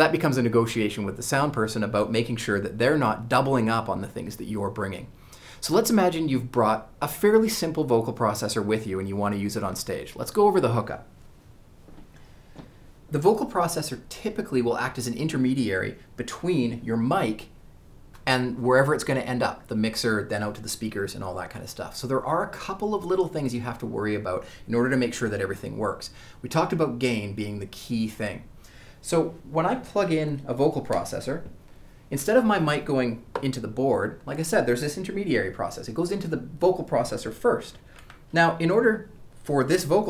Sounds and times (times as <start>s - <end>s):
Speech: 0.0s - 11.1s, 13.1s - 17.6s, 18.2s - 40.1s.